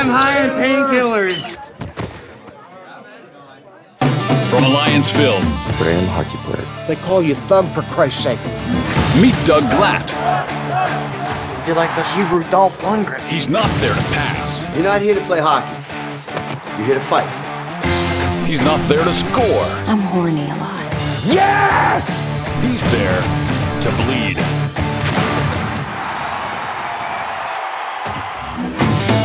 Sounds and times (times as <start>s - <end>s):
Yell: 21.2s - 22.3s.